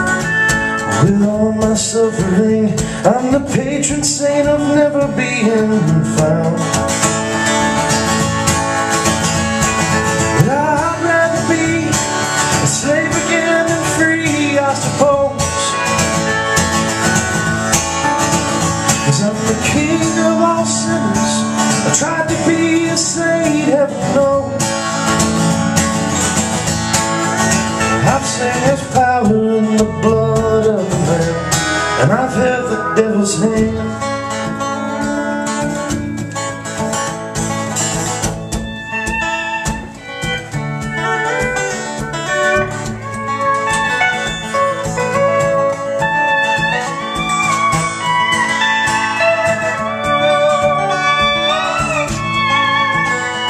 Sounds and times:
Guitar: 0:00.0 - 0:53.4.

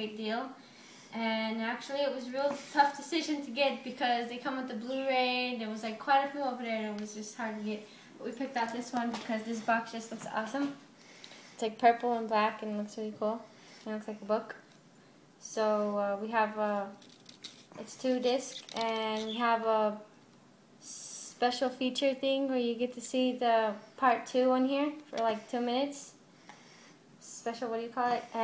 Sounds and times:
Speech: 0:00.0 - 0:00.6, 0:01.2 - 0:10.8, 0:11.6 - 0:14.6, 0:15.4 - 0:17.0, 0:17.8 - 0:20.1, 0:20.8 - 0:26.2, 0:27.2 - 0:28.4.

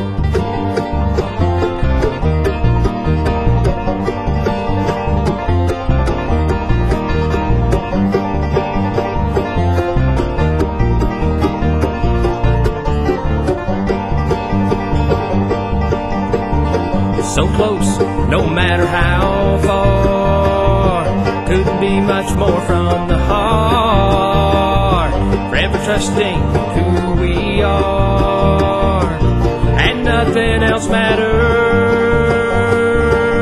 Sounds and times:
Music: 0:00.0 - 0:33.4.

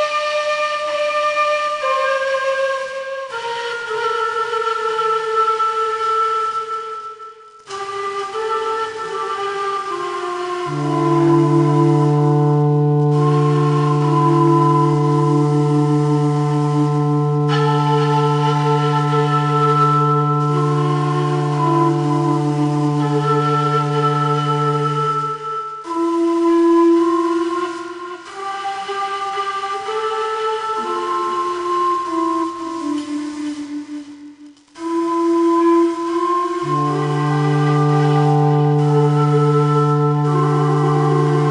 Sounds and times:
Flute: 0:00.0 - 0:41.5.

